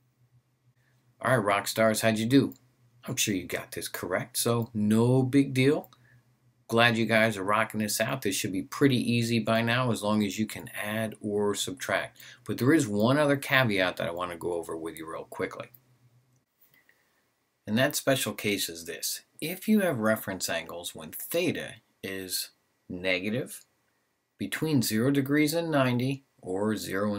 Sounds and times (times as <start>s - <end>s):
Speech: 1.2s - 6.0s, 6.7s - 15.8s, 17.7s - 23.7s, 24.4s - 27.1s.